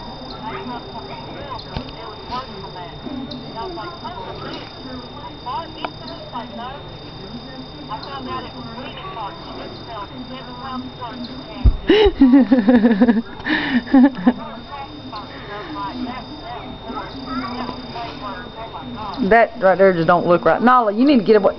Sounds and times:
Speech: 14.4s - 21.5s.

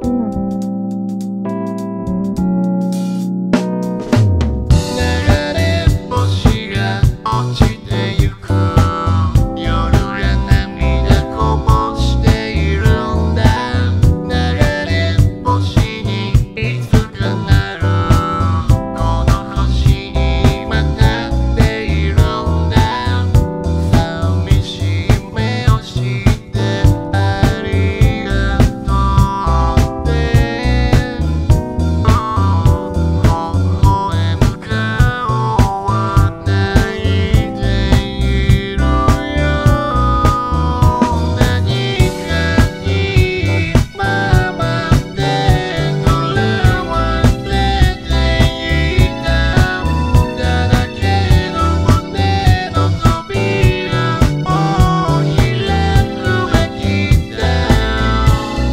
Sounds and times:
Music: 0.0s - 58.7s.

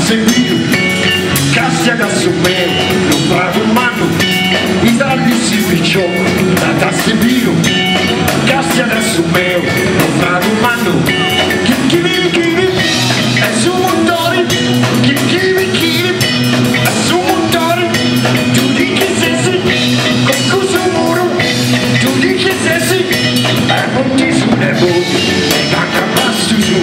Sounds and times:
Blues: 0.0s - 26.8s.

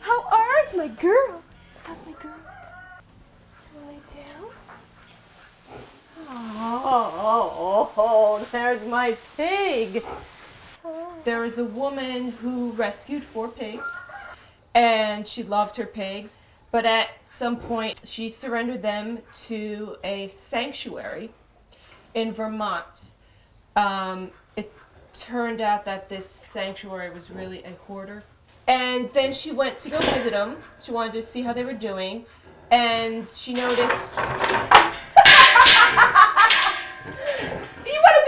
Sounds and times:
Speech: 0.0s - 2.4s, 3.8s - 4.6s, 6.2s - 10.0s, 10.9s - 14.0s, 14.8s - 21.4s, 22.2s - 23.1s, 25.2s - 34.2s, 37.8s - 38.2s.

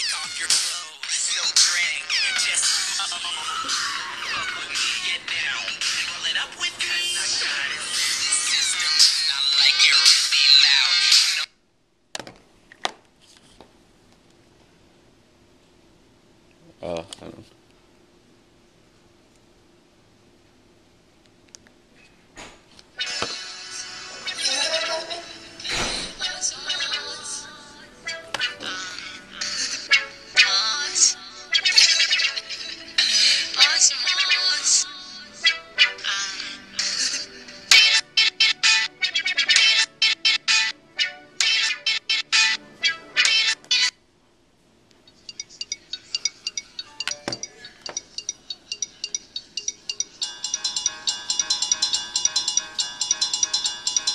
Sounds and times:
Speech: 16.6s - 17.6s.

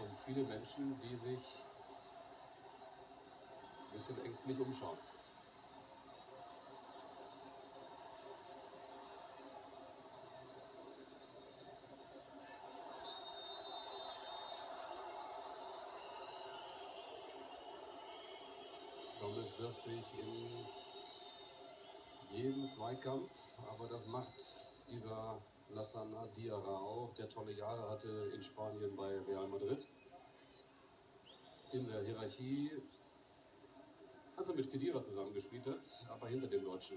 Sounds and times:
Speech: 0.0s - 1.7s, 3.9s - 5.1s, 19.2s - 20.8s, 22.3s - 29.9s, 31.7s - 32.9s, 34.4s - 36.9s.

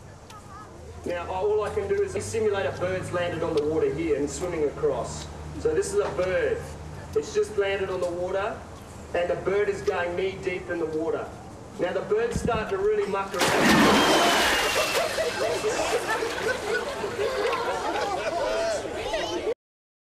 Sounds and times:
Speech: 9.2s - 13.4s.

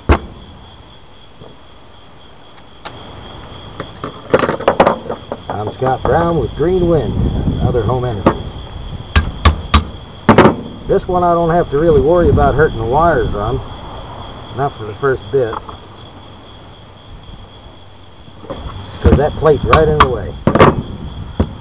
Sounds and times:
Wind noise (microphone): 6.4s - 10.0s, 11.6s - 13.7s, 18.6s - 21.6s.

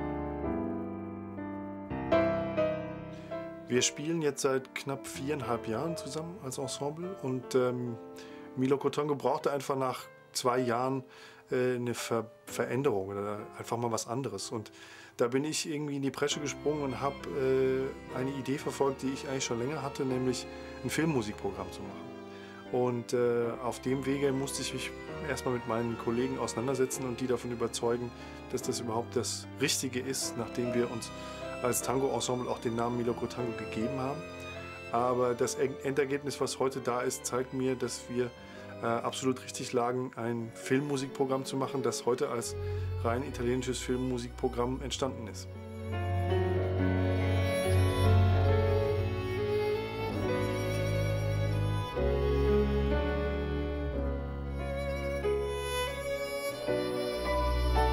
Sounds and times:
Music: 0.0s - 57.9s
Speech: 3.7s - 8.0s, 8.6s - 22.0s, 22.7s - 34.2s, 34.9s - 45.5s.

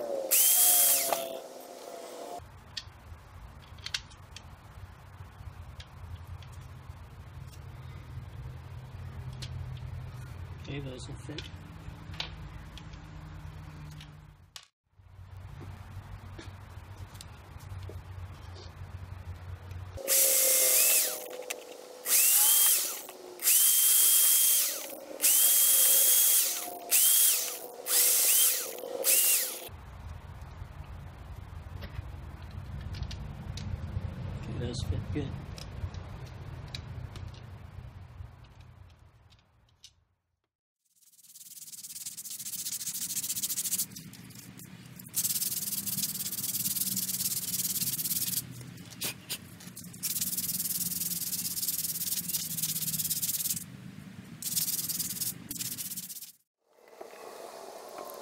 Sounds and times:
Drill: 0.3s - 1.4s, 20.0s - 21.3s, 22.0s - 29.7s.

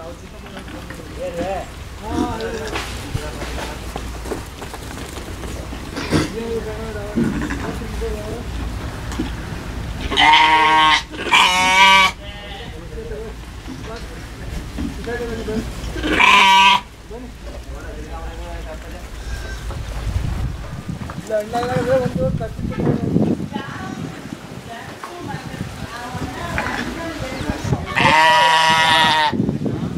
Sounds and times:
Speech: 0.0s - 4.0s, 21.2s - 28.6s
Bleat: 10.0s - 12.8s, 16.0s - 16.9s, 27.9s - 29.4s.

